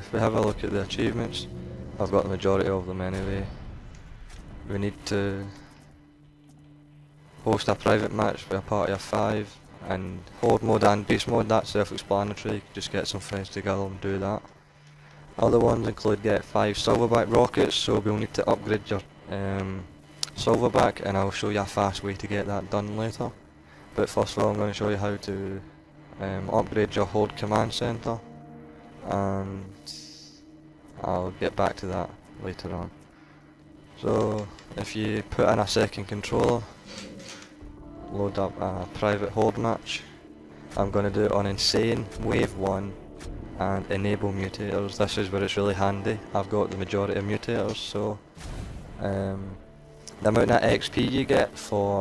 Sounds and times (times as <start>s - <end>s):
Speech: 0.0s - 3.6s, 4.7s - 5.6s, 7.4s - 14.5s, 15.4s - 23.4s, 24.0s - 25.6s, 26.2s - 28.2s, 29.0s - 30.4s, 31.0s - 32.9s, 34.0s - 36.7s, 38.1s - 40.1s, 40.8s - 43.0s, 43.6s - 48.2s, 49.0s - 52.0s.